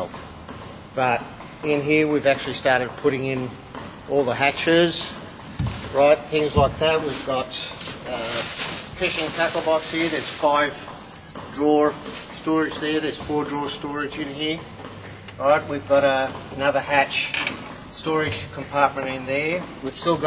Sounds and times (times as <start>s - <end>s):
Speech: 0.0s - 0.3s, 1.0s - 5.2s, 5.9s - 10.9s, 11.5s - 14.7s, 15.4s - 17.3s, 17.9s - 20.2s.